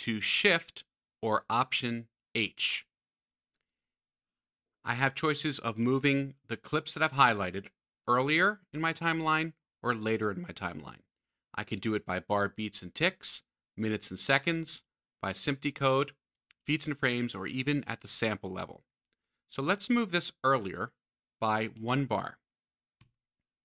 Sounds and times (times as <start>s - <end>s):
Speech: 0.0s - 2.9s, 4.8s - 18.9s, 19.5s - 22.5s.